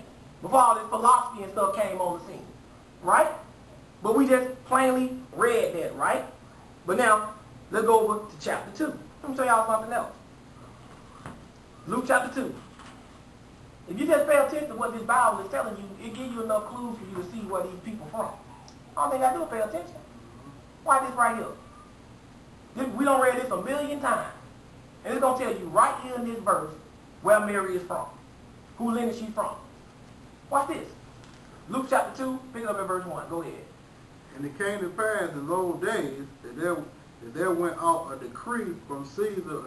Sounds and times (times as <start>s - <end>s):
Speech: 0.0s - 10.2s, 11.9s - 12.7s, 13.9s - 21.6s, 22.8s - 24.4s, 25.0s - 28.2s, 28.8s - 29.7s, 30.5s - 31.0s, 31.7s - 39.6s
Inside, small room: 0.0s - 39.6s.